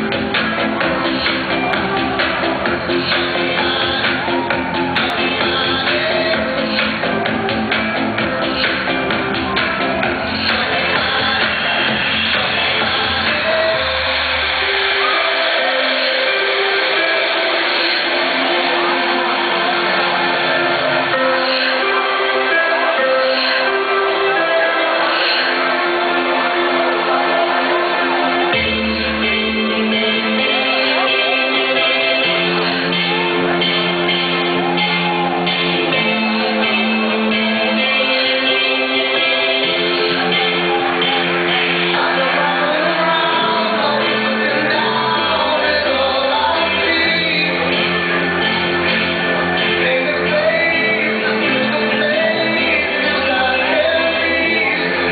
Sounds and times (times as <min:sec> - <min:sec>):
Tender music: 0:00.0 - 0:55.1.